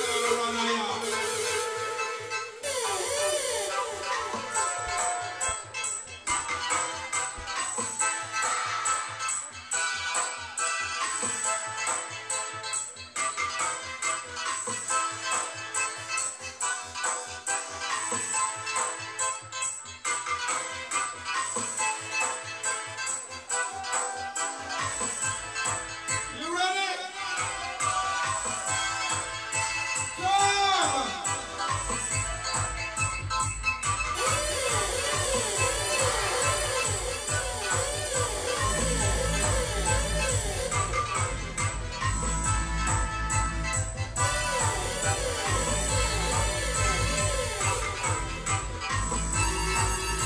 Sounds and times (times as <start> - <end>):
Music: 0.0 - 50.2.